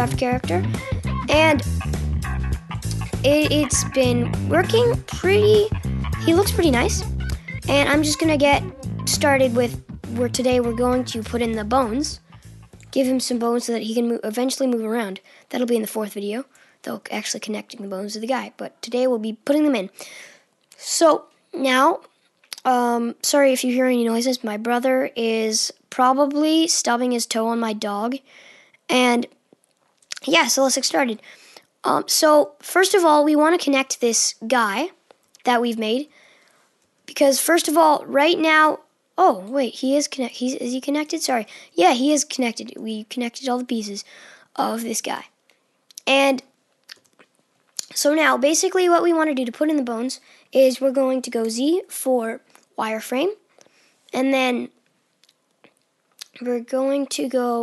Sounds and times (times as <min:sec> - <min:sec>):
Speech: 0:00.0 - 0:01.7, 0:03.1 - 0:12.2, 0:12.9 - 0:19.9, 0:20.8 - 0:28.2, 0:28.9 - 0:29.4, 0:30.1 - 0:31.2, 0:31.8 - 0:36.1, 0:37.1 - 0:45.3, 0:45.9 - 0:46.5, 0:47.8 - 0:53.4, 0:54.1 - 0:54.7, 0:56.2 - 0:57.6.